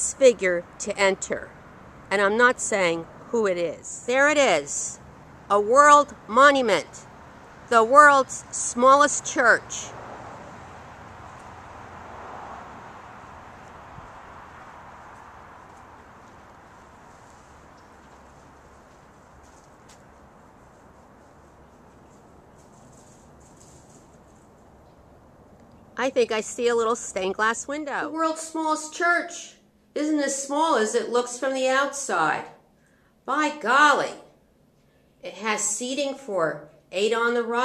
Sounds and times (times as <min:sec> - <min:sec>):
Speech: 0:00.0 - 0:01.5, 0:02.1 - 0:07.0, 0:07.7 - 0:09.9, 0:26.0 - 0:32.6, 0:33.3 - 0:34.3, 0:35.2 - 0:37.6.